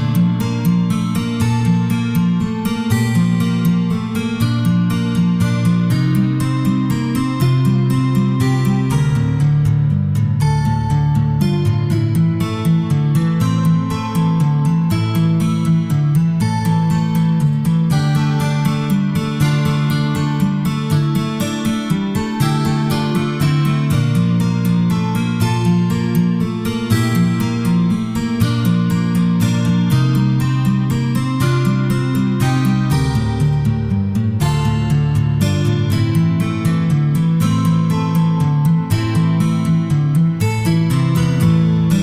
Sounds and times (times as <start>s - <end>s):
Acoustic guitar: 0.0s - 42.0s.